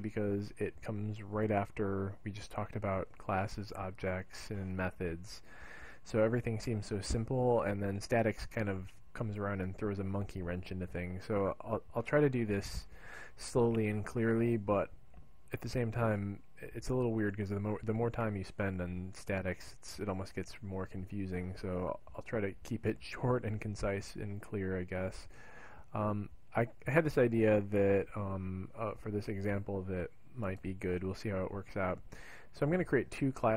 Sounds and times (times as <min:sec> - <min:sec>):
Speech: 0:00.0 - 0:25.3, 0:25.9 - 0:33.5.